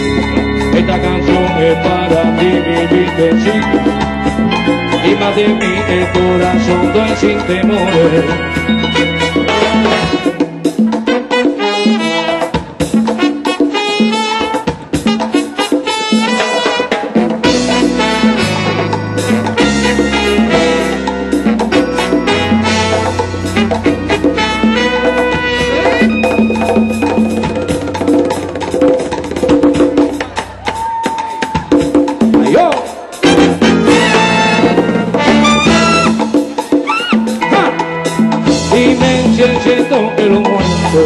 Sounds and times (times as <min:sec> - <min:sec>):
Salsa music: 0:00.0 - 0:41.0.